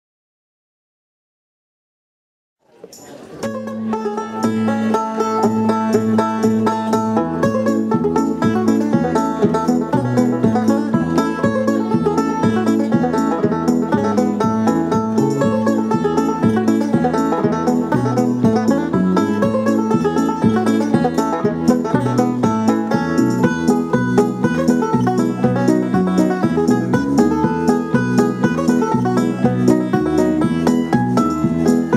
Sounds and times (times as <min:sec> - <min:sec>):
Banjo: 0:02.6 - 0:31.9
Bowed string instrument: 0:02.7 - 0:31.9.